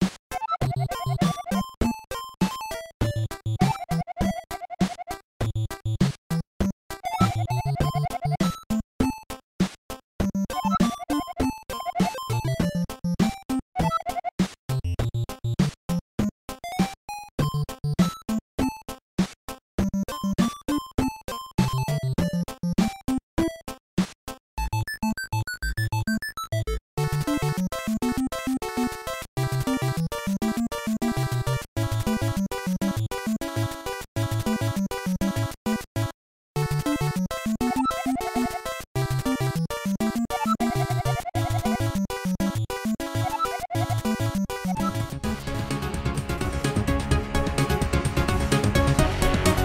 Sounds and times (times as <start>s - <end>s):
Music: 0.0s - 49.6s.